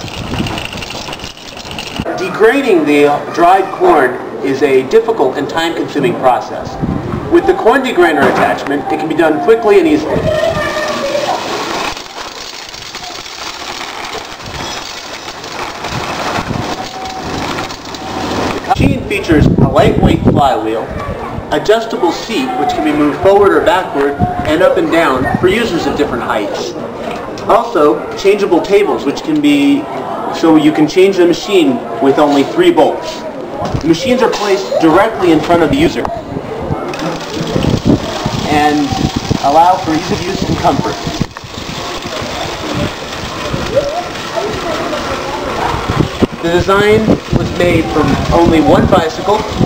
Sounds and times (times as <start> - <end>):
Bicycle: 0.0 - 2.3, 10.4 - 18.8, 36.8 - 49.6.